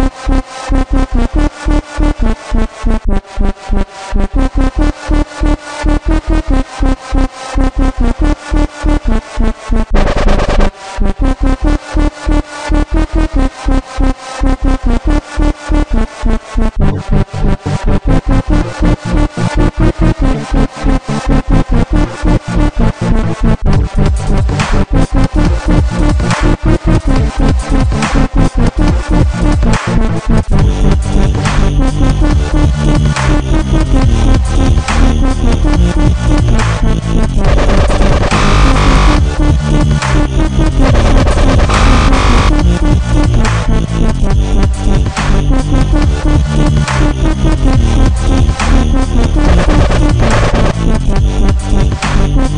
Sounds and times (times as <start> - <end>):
Dubstep: 0.0 - 52.5.